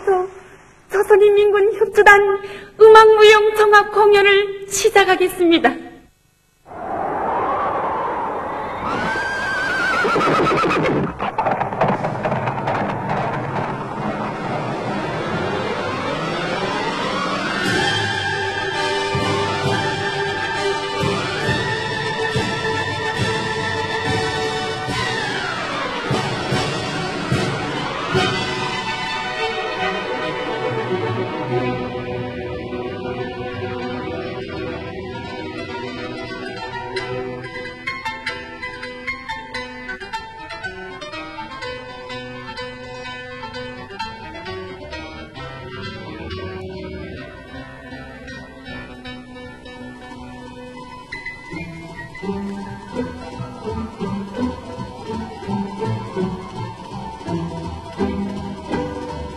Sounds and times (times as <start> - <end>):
Music: 13.8 - 59.3.